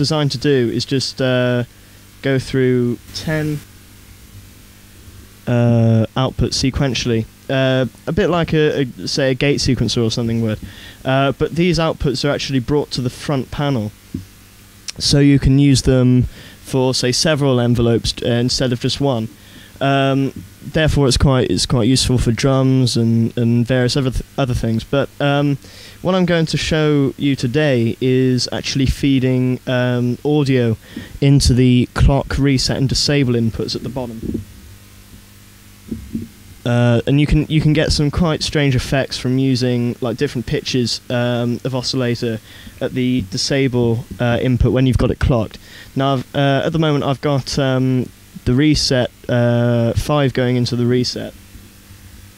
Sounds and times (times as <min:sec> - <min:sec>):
Speech: 0:00.0 - 0:03.7, 0:05.5 - 0:14.0, 0:14.9 - 0:34.4, 0:36.6 - 0:51.4.